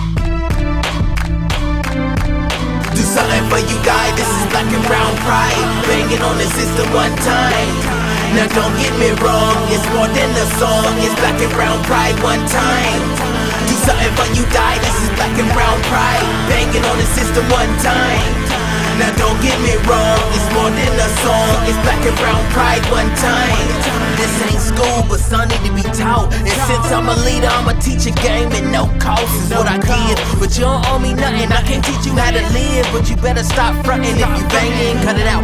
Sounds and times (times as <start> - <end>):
Exciting music: 0.0 - 35.4.